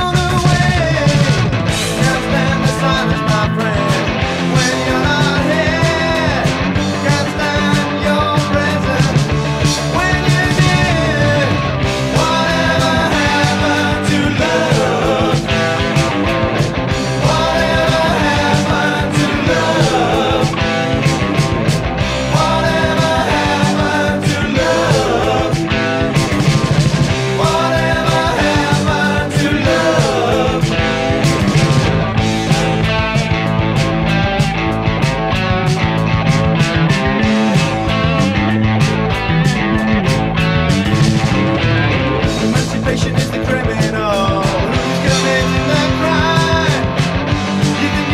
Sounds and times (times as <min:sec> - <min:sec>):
Music: 0:00.0 - 0:48.1.